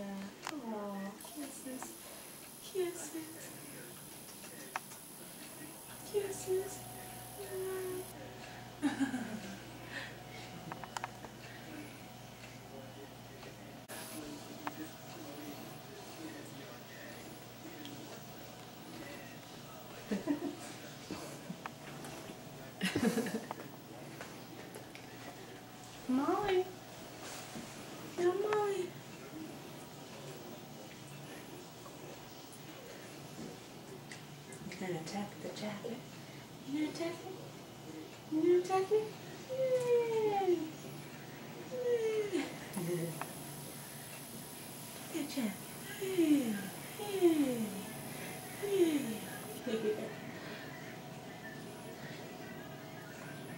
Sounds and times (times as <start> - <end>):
Speech: 0.0 - 10.5, 11.4 - 36.1, 36.7 - 43.3, 45.0 - 48.0, 48.6 - 50.6.